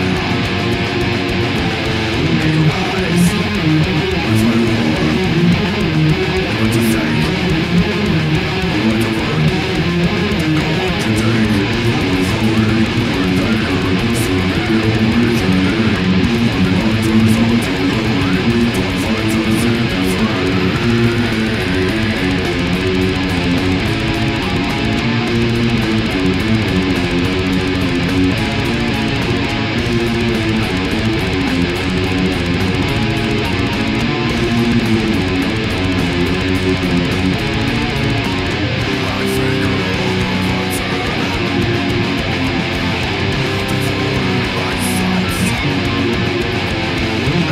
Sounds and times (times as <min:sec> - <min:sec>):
Electric guitar: 0:00.0 - 0:47.5.